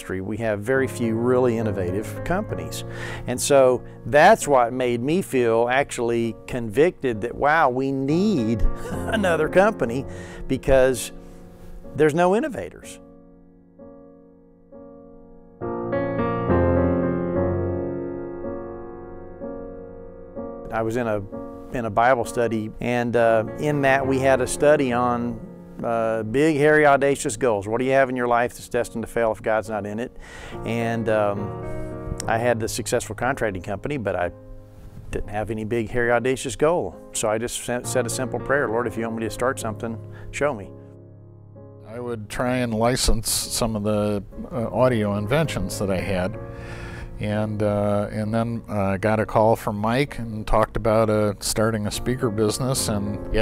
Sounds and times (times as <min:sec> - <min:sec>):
Speech: 0:00.0 - 0:11.2, 0:12.0 - 0:13.0, 0:20.7 - 0:31.5, 0:32.2 - 0:34.3, 0:35.1 - 0:40.7, 0:41.9 - 0:46.4, 0:47.2 - 0:53.4
Music: 0:00.0 - 0:53.4.